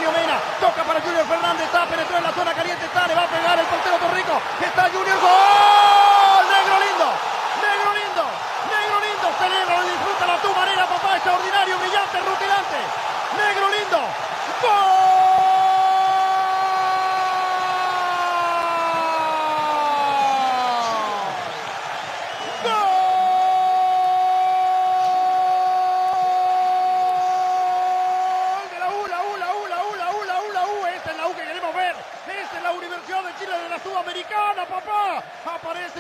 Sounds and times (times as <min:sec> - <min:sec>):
Speech: 0:00.0 - 0:15.3, 0:28.6 - 0:36.0.